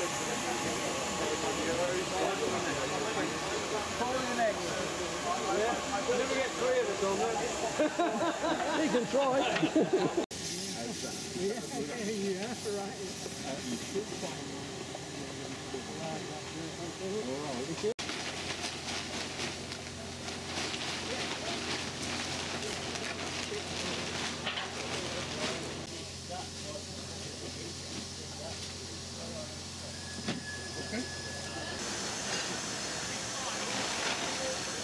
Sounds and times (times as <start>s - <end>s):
Speech: 0.0s - 7.8s, 10.6s - 18.0s.